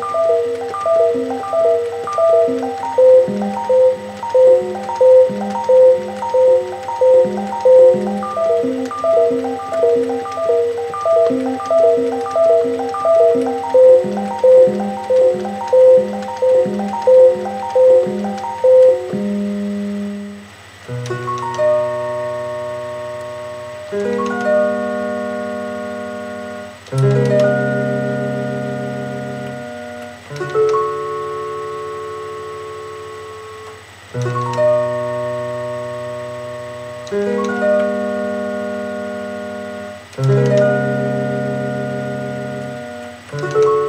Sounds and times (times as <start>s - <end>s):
Inside, small room: 0.0s - 43.8s
Music: 0.0s - 43.8s.